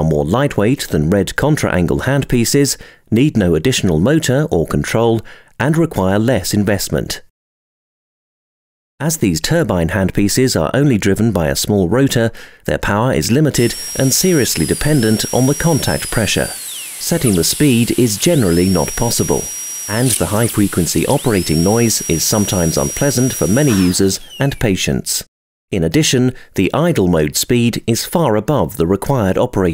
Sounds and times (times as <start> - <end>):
Speech: 0.0 - 7.3, 9.0 - 16.5, 17.1 - 29.7.